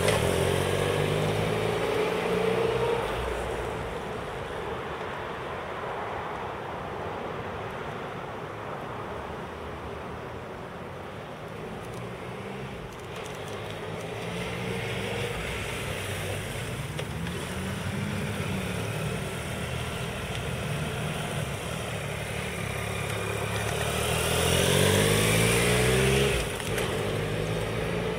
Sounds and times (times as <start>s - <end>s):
Accelerating, revving, vroom: 0.0s - 3.4s, 13.8s - 16.5s, 23.7s - 28.1s
Medium engine (mid frequency): 0.0s - 4.9s, 11.6s - 28.1s
Vehicle: 0.0s - 28.1s.